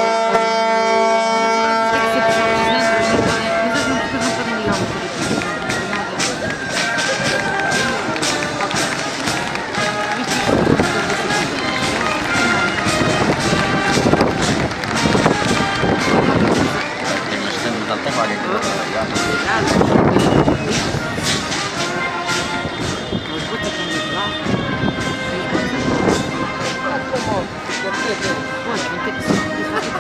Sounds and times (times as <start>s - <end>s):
Speech: 1.8s - 22.6s, 23.2s - 30.0s
Music: 1.8s - 30.0s.